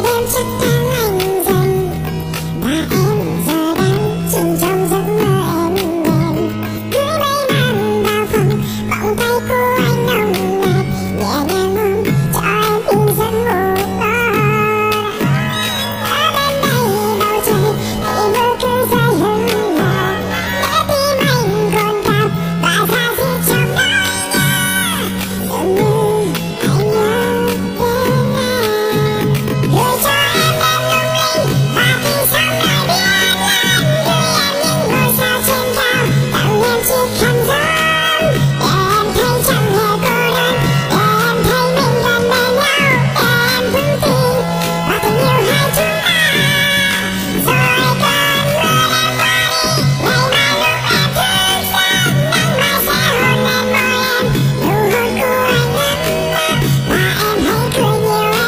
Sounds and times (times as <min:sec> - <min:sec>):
Music: 0:00.0 - 0:58.4
Singing: 0:00.0 - 0:58.4.